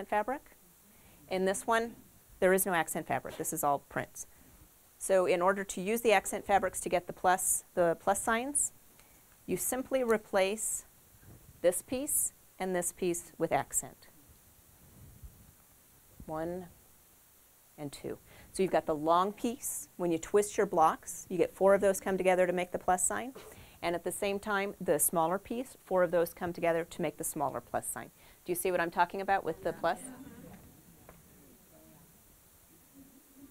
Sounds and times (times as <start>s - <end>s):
Speech: 1.3s - 4.3s, 5.0s - 8.7s, 9.5s - 10.9s, 11.6s - 14.1s, 16.2s - 16.7s, 17.8s - 30.6s.